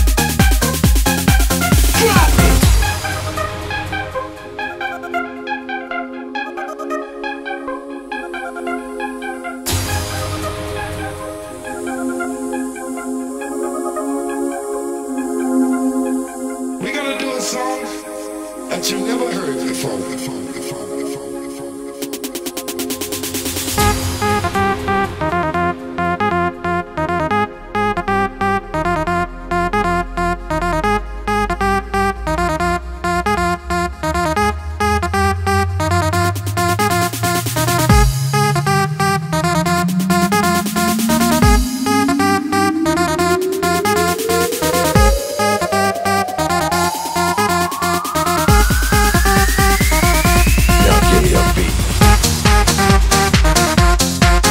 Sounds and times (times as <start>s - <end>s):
House music: 0.0s - 24.0s, 35.8s - 54.5s
Electronic dance music: 0.0s - 24.4s, 36.0s - 54.5s
Electronica: 0.0s - 30.8s, 33.5s - 54.5s
Speech: 2.0s - 2.5s, 16.8s - 18.0s, 18.7s - 20.5s, 50.7s - 51.9s.